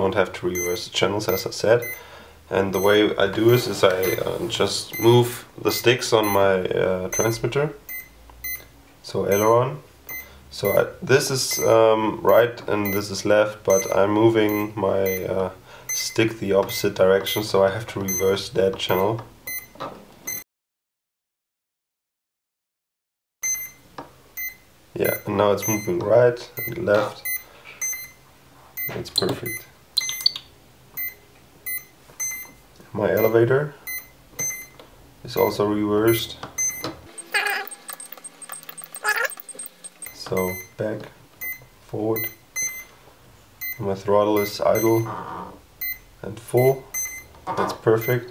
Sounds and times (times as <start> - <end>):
Speech: 0.0 - 1.9, 2.5 - 7.8, 9.0 - 9.9, 10.5 - 19.3, 25.0 - 27.3, 28.9 - 29.7, 32.9 - 33.8, 35.2 - 36.4, 40.2 - 41.2, 41.9 - 42.4, 43.8 - 45.2, 46.2 - 46.9, 47.5 - 48.3
Inside, small room: 0.0 - 20.4, 23.4 - 48.3.